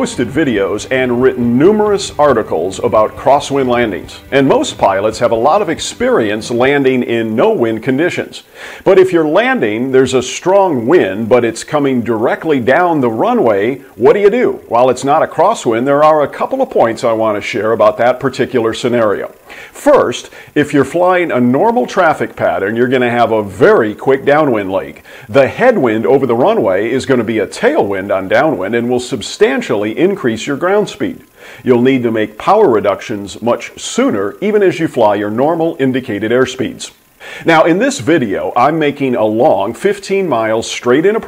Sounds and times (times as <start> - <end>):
Speech: 0.0 - 41.2.